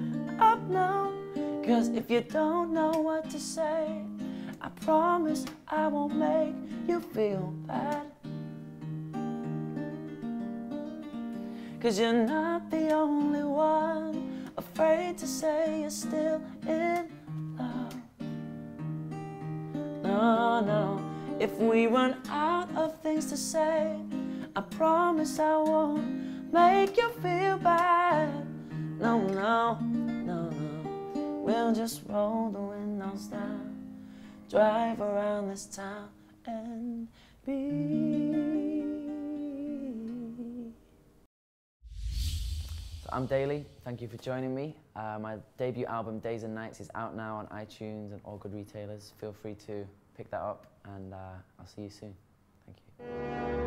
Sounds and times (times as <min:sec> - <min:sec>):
Music: 0:00.0 - 0:36.5, 0:37.2 - 0:41.2, 0:53.0 - 0:53.6
Inside, small room: 0:00.0 - 0:53.6
Speech: 0:43.1 - 0:52.9.